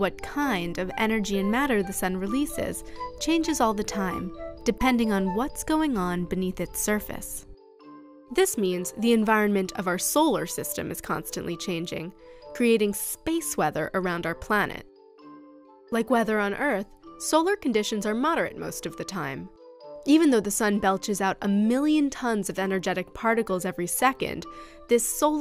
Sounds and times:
Speech: 0:00.0 - 0:07.4, 0:08.4 - 0:14.8, 0:16.0 - 0:19.5, 0:20.1 - 0:25.4
Music: 0:00.0 - 0:25.4.

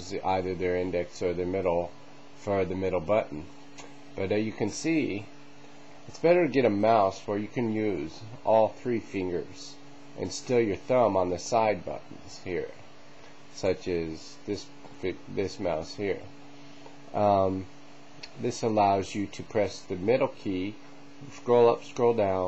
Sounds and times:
Speech: 0:00.0 - 0:03.5, 0:04.2 - 0:05.4, 0:06.1 - 0:12.8, 0:13.5 - 0:16.3, 0:17.1 - 0:22.4.

